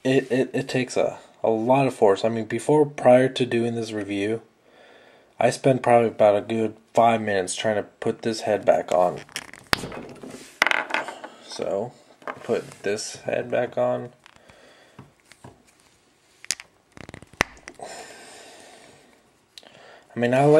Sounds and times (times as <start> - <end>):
Speech: 0.0 - 4.5, 5.4 - 9.2, 11.5 - 14.2, 20.1 - 20.5
Inside, small room: 0.0 - 20.5.